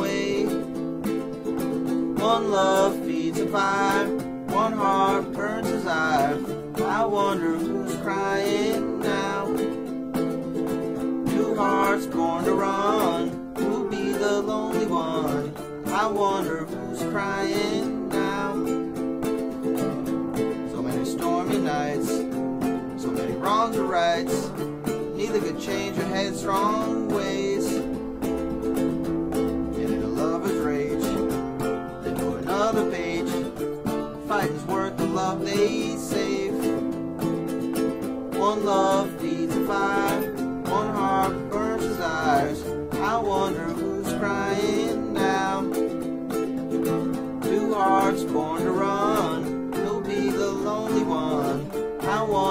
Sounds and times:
Strum: 0.0s - 52.5s.

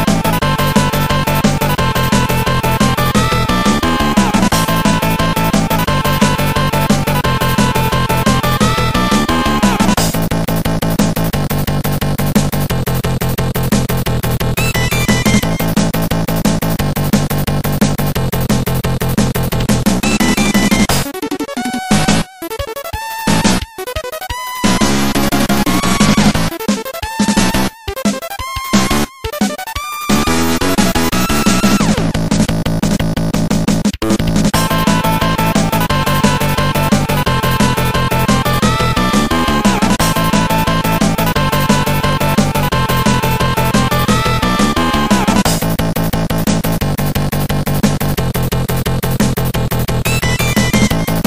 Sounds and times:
Music: 0.0s - 51.2s.

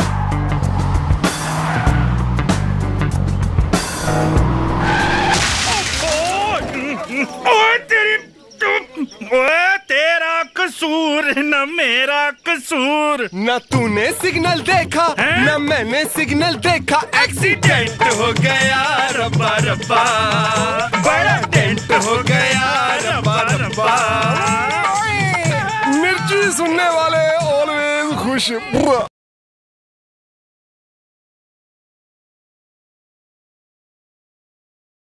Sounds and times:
Music: 0.0s - 5.2s, 13.8s - 28.5s
Speech: 6.1s - 17.6s, 24.6s - 29.1s.

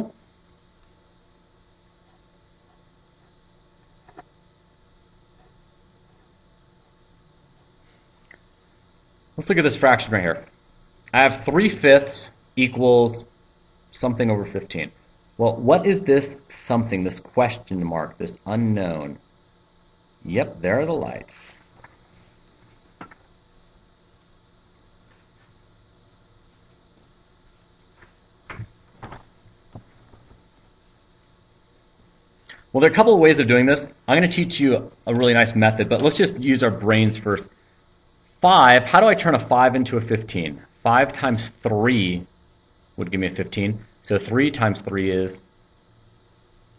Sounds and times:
Speech: 9.4s - 10.5s, 11.1s - 13.3s, 13.9s - 19.2s, 20.2s - 21.6s, 32.7s - 37.5s, 38.4s - 42.3s, 43.0s - 45.5s.

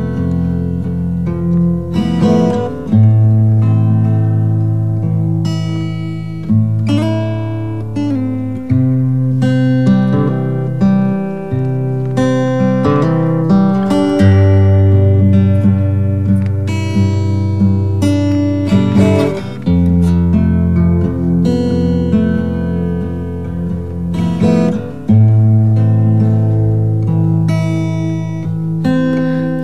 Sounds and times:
Music: 0.0s - 29.6s.

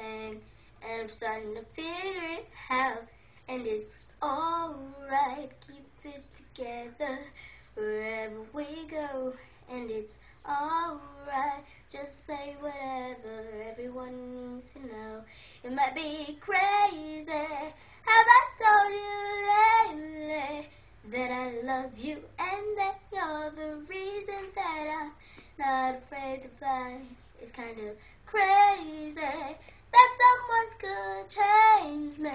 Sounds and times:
Child singing: 0.0s - 32.3s.

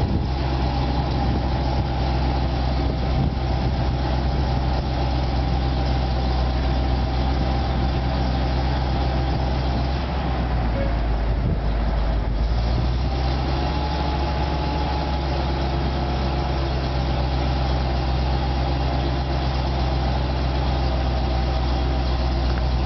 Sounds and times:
Vehicle: 0.0s - 22.8s.

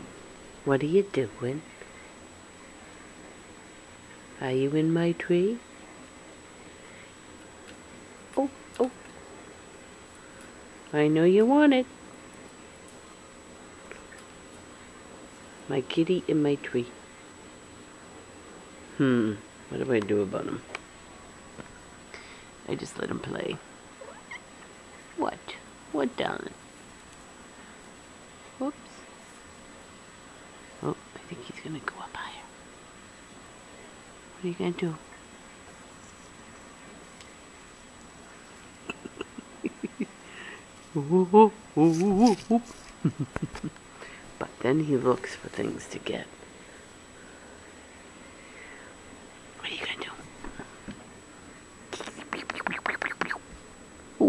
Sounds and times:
Speech: 0.6s - 1.7s, 4.4s - 5.7s, 8.4s - 9.0s, 10.9s - 11.9s, 15.7s - 17.0s, 19.0s - 20.7s, 22.7s - 23.6s, 25.2s - 26.6s, 30.8s - 32.2s, 34.4s - 35.0s, 41.0s - 42.7s, 44.4s - 46.3s.

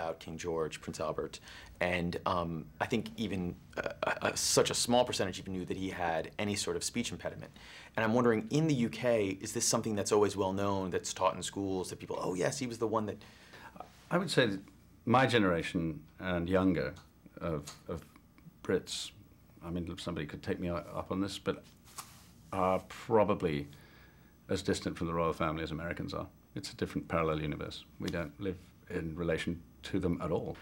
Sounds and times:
Male speech, man speaking: 0.0s - 13.2s, 14.1s - 21.7s, 22.5s - 23.7s, 24.5s - 30.6s
Narration, monologue: 0.0s - 30.6s.

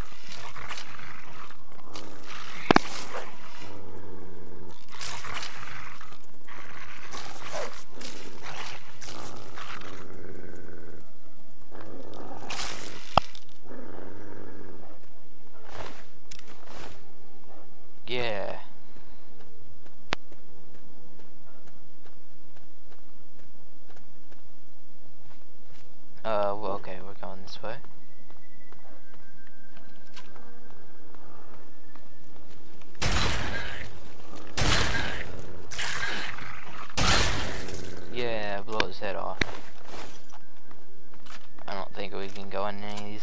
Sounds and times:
Roar: 0.0s - 11.1s, 11.7s - 16.1s
Outside, urban or manmade: 0.0s - 43.2s
Speech: 18.1s - 18.7s, 26.2s - 27.8s, 38.1s - 39.4s, 41.7s - 43.2s.

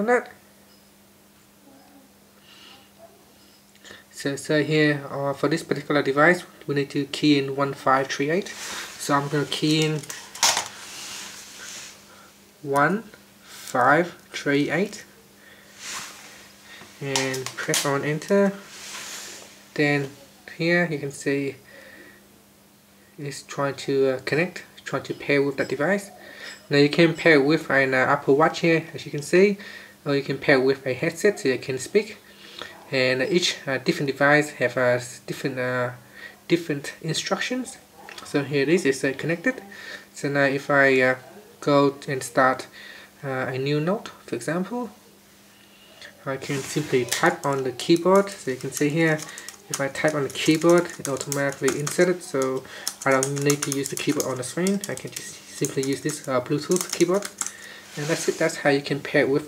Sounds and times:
Speech: 0.0s - 0.4s, 4.2s - 10.1s, 12.7s - 15.1s, 17.0s - 18.6s, 19.8s - 21.6s, 23.2s - 32.2s, 32.8s - 45.0s, 46.2s - 57.4s, 58.0s - 59.4s.

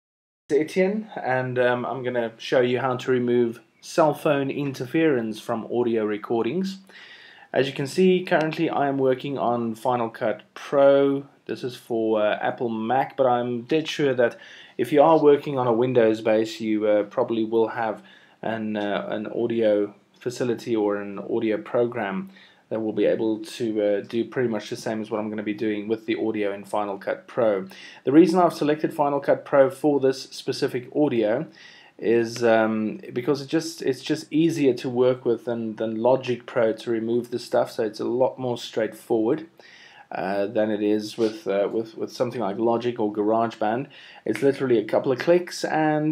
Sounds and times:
Speech: 0.5s - 6.9s, 7.5s - 46.1s.

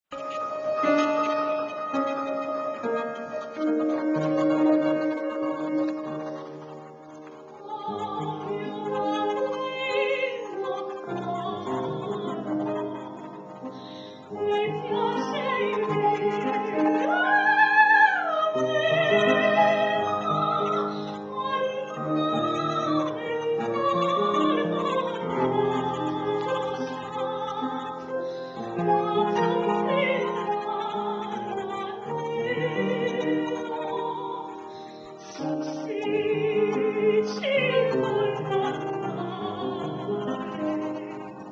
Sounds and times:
Opera: 0.1s - 41.5s.

